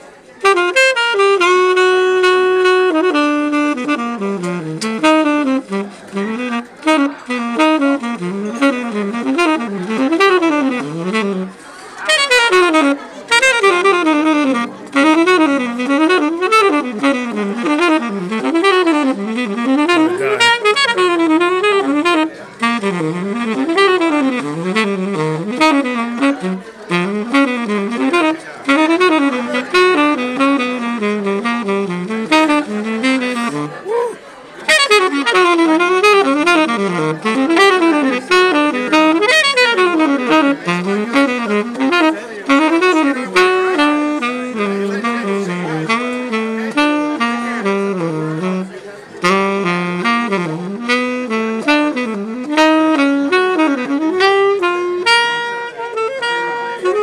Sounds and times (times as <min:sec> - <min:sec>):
Wind instrument, woodwind instrument: 0:00.0 - 0:57.0.